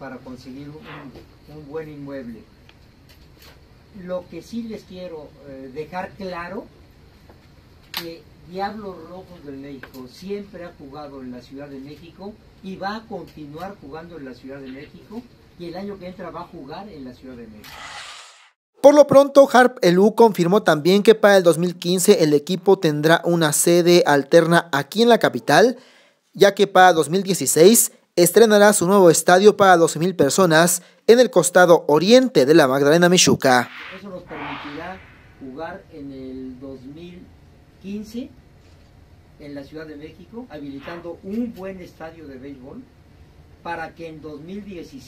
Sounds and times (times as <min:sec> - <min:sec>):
Speech: 0:00.0 - 0:02.5, 0:04.0 - 0:06.7, 0:08.0 - 0:17.6, 0:18.8 - 0:25.8, 0:26.4 - 0:38.4, 0:39.4 - 0:42.9, 0:43.6 - 0:45.0.